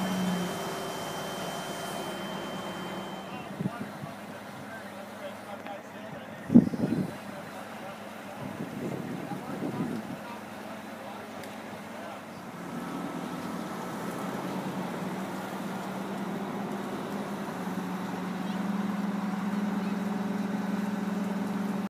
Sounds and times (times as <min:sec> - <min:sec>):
Vehicle: 0:00.0 - 0:21.8.